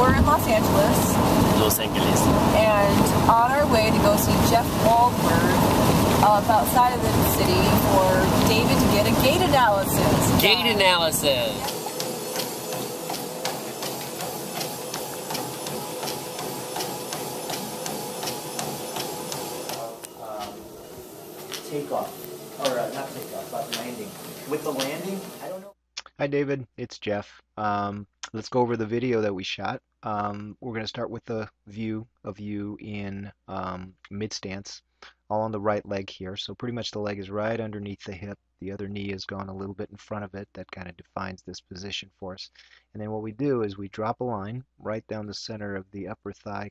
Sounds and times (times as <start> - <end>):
Speech: 0.0 - 5.6, 6.2 - 11.7, 19.7 - 20.6, 21.6 - 46.7.